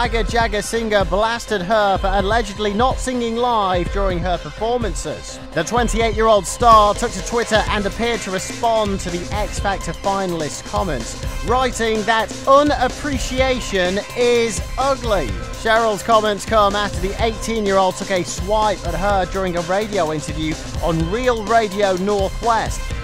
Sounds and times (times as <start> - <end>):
Speech: 0.0 - 22.8
Music: 0.0 - 23.0.